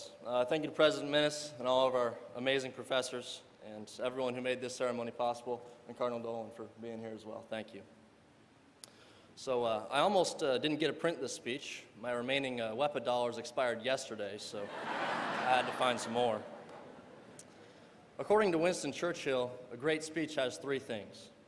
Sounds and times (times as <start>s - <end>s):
Male speech, man speaking: 0.0s - 7.9s, 9.4s - 14.7s, 15.4s - 16.5s, 18.2s - 21.4s
Narration, monologue: 0.0s - 21.4s.